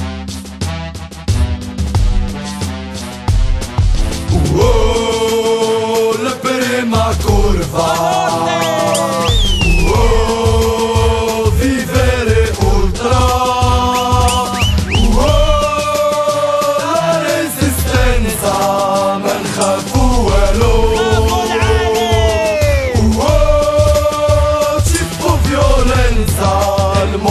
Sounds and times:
Music: 0.0s - 27.3s.

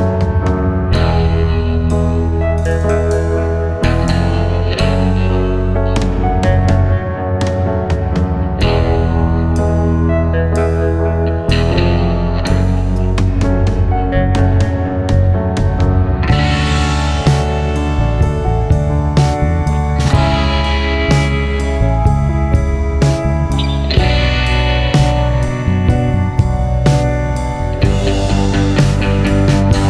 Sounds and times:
Music: 0.0s - 29.9s.

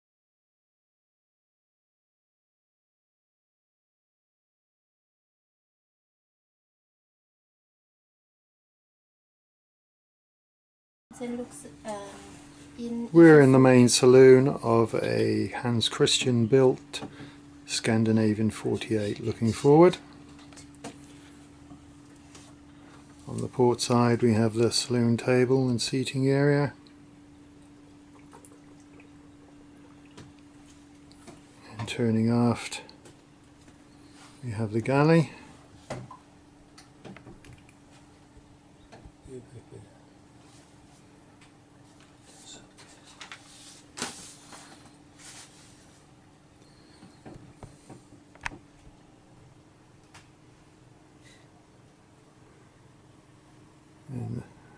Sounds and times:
Speech: 11.2s - 17.1s, 17.7s - 20.0s, 23.3s - 26.8s, 31.7s - 32.9s, 34.4s - 35.4s, 39.3s - 39.9s, 54.1s - 54.6s.

